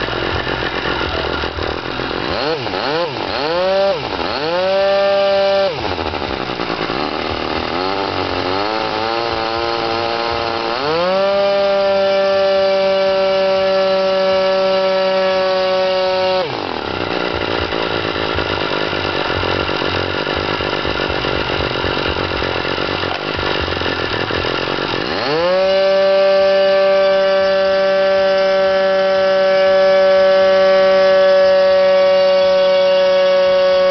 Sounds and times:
Idling: 0.0 - 33.9
Medium engine (mid frequency): 0.0 - 33.9.

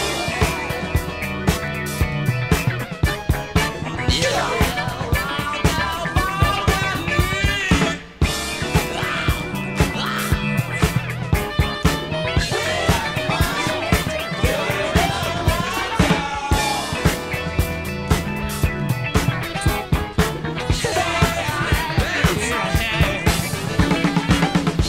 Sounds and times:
Funk: 0.0 - 24.8
Swing music: 0.0 - 24.8.

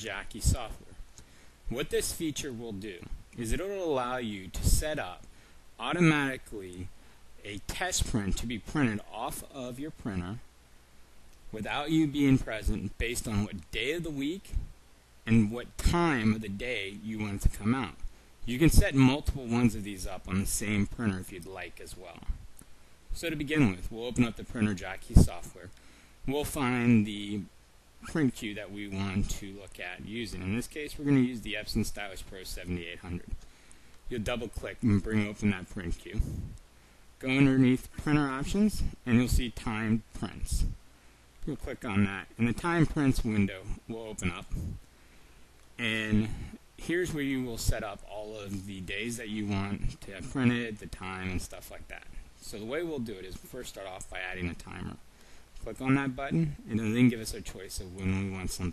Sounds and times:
Speech: 0.0 - 1.0, 1.7 - 10.5, 11.5 - 22.4, 23.1 - 33.4, 34.1 - 36.6, 37.2 - 40.8, 41.4 - 44.8, 45.8 - 55.0, 55.6 - 58.7.

